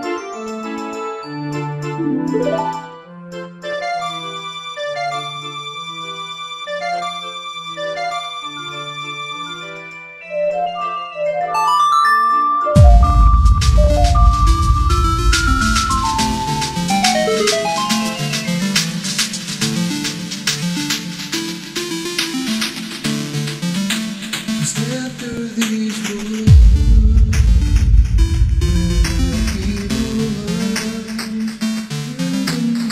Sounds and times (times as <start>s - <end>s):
Electronic music: 2.0s - 3.2s, 12.8s - 25.3s, 26.3s - 32.8s.